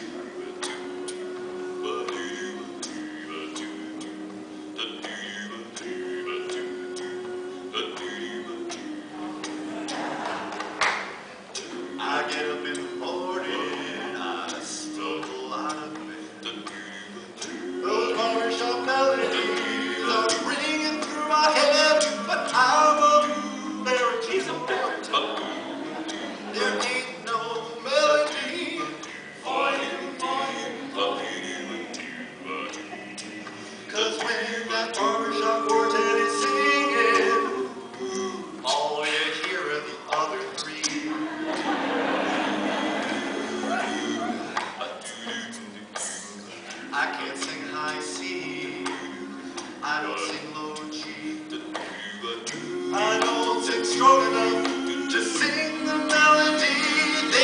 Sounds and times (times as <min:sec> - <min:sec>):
Male singing: 0:00.0 - 0:04.2, 0:04.8 - 0:10.0, 0:11.6 - 0:41.8, 0:42.8 - 0:57.4.